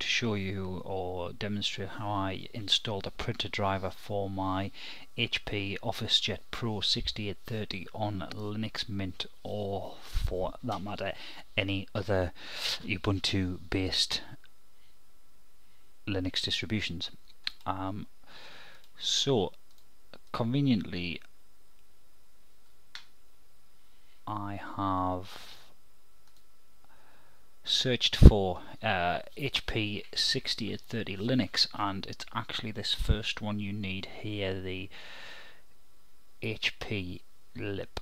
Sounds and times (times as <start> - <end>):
Speech: 0.0 - 14.5, 16.1 - 18.1, 19.0 - 19.6, 20.2 - 21.3, 24.3 - 25.8, 27.6 - 34.9, 36.4 - 38.0.